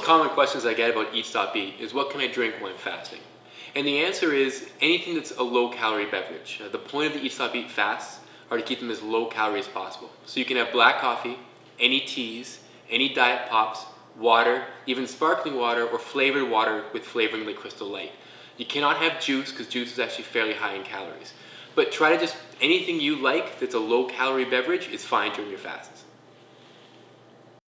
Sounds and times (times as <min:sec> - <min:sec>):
Speech: 0:00.0 - 0:26.1.